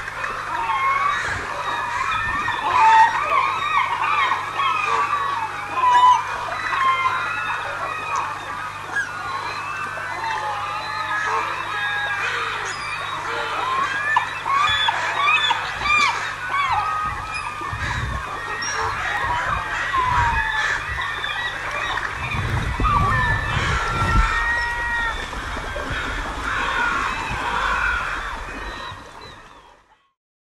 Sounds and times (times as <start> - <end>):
Domestic animals, pets: 0.5 - 25.2.